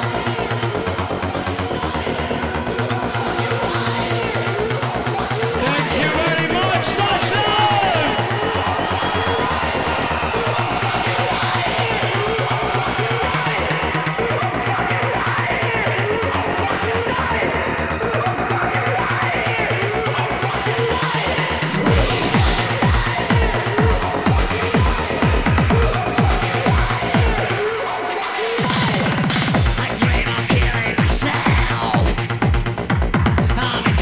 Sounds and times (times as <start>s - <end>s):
Music: 0.0s - 34.0s.